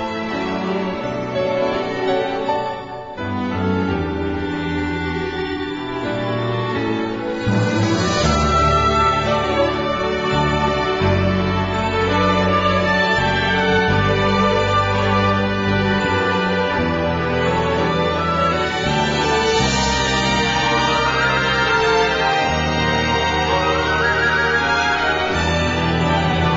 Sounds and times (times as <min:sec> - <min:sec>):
Tender music: 0:00.0 - 0:26.5
Theme music: 0:00.0 - 0:26.5.